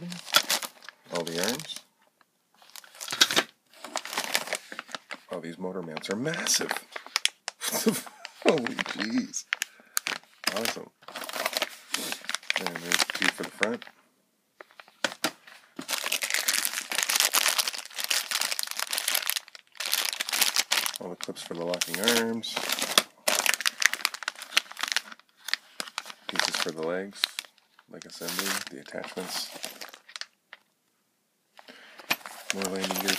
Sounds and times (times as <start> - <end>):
Crumpling, crinkling: 0.0 - 1.9, 2.6 - 14.0, 14.6 - 30.8, 31.6 - 33.1
Inside, small room: 0.0 - 33.1
Speech: 1.1 - 1.9, 5.3 - 6.8, 8.4 - 9.5, 10.5 - 11.0, 12.6 - 13.9, 21.0 - 22.6, 26.3 - 29.6, 32.6 - 33.1.